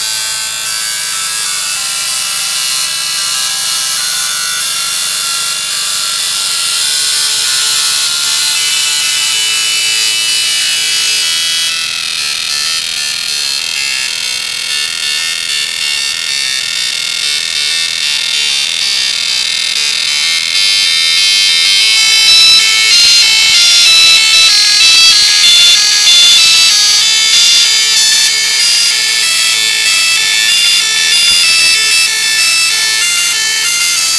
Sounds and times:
Inside, small room: 0.0s - 34.1s
Music: 0.0s - 34.1s
Printer: 0.0s - 34.1s.

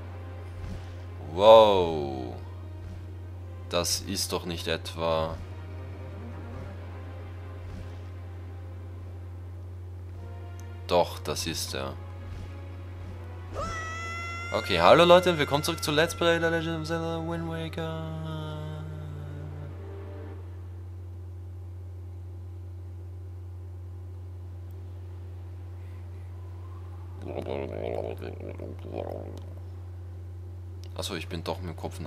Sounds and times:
Speech: 1.2s - 2.4s, 3.8s - 5.4s, 10.9s - 12.0s, 14.6s - 18.6s, 27.2s - 29.5s, 30.9s - 32.0s.

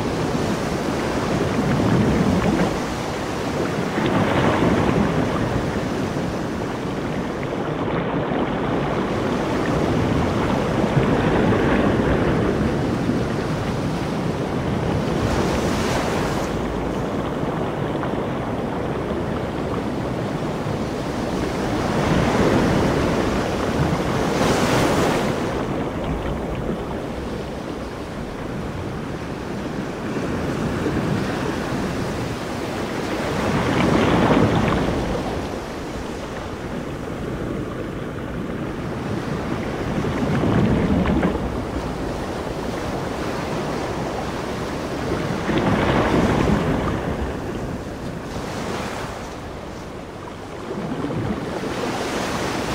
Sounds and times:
Outside, rural or natural: 0.0s - 52.7s.

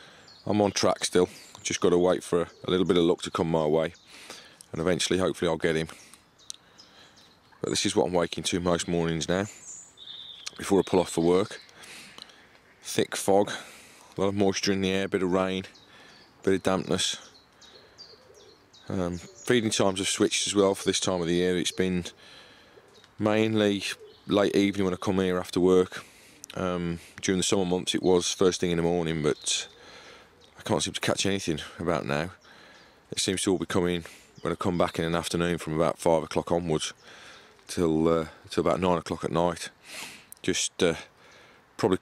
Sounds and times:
Speech: 0.5s - 4.0s, 4.7s - 6.0s, 7.6s - 9.6s, 10.5s - 11.6s, 12.8s - 15.8s, 16.4s - 17.3s, 18.9s - 22.2s, 23.2s - 29.7s, 30.6s - 32.4s, 33.1s - 37.0s, 37.7s - 39.8s, 40.4s - 41.1s, 41.8s - 42.0s.

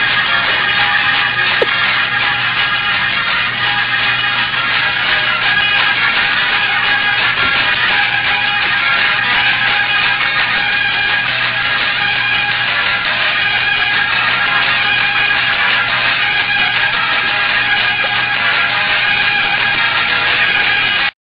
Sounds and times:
Music: 0.0s - 21.1s.

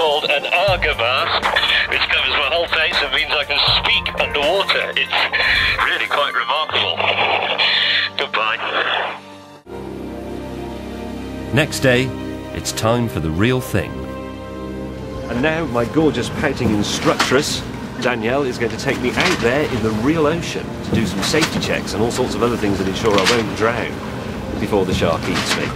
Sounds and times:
Radio: 0.0s - 9.2s.

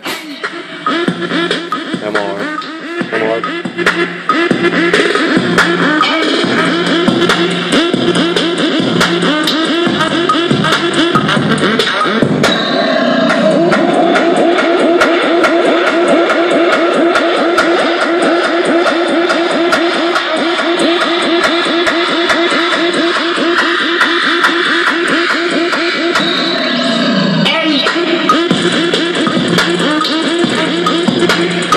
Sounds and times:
Music: 0.0s - 31.7s.

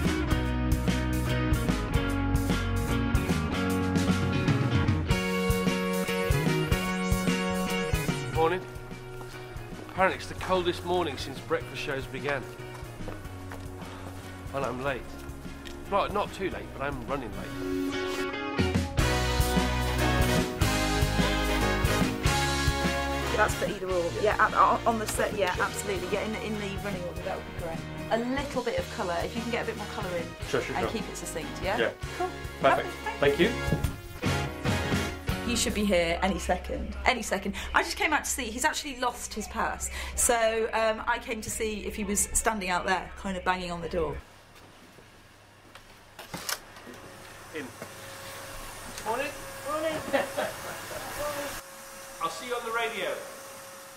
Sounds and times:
Music: 0.0s - 44.2s.

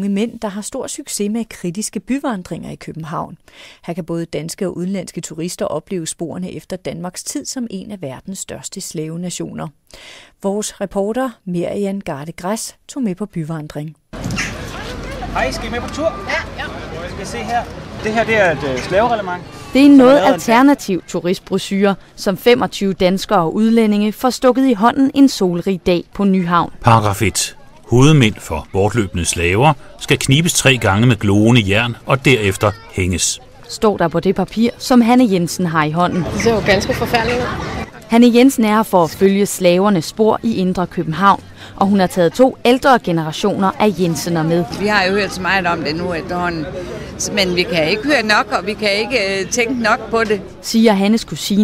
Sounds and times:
Speech: 19.8s - 46.6s.

